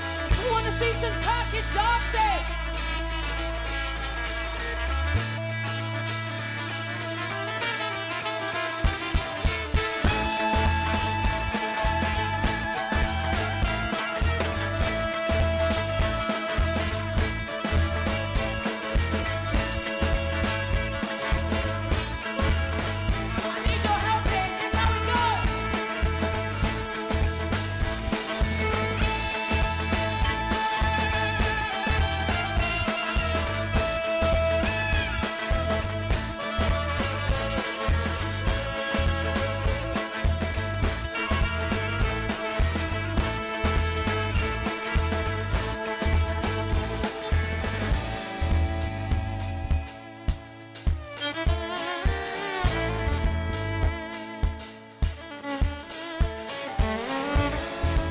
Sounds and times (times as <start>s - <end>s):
Music: 0.0s - 58.1s.